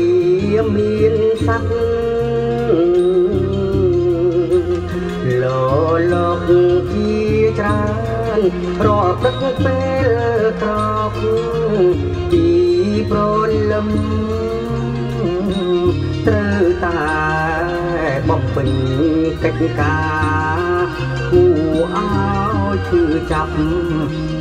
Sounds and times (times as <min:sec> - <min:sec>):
Music: 0:00.0 - 0:24.4.